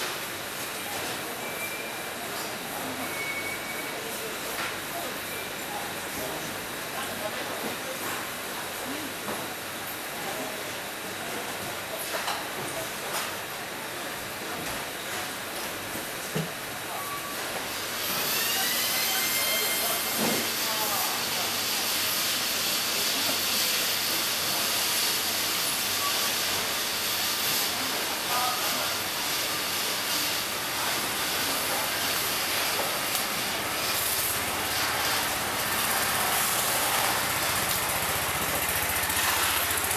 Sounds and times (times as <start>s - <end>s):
Inside, large room or hall: 0.0s - 39.9s
Speech: 0.7s - 15.6s, 16.4s - 17.6s, 18.2s - 33.7s.